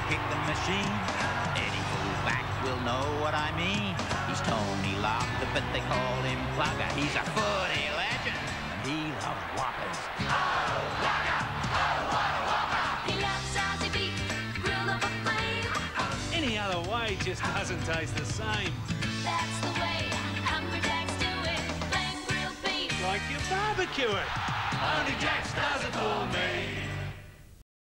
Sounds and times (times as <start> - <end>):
Music: 0.0 - 27.6
Speech: 1.6 - 10.1, 16.3 - 18.7, 23.0 - 24.3.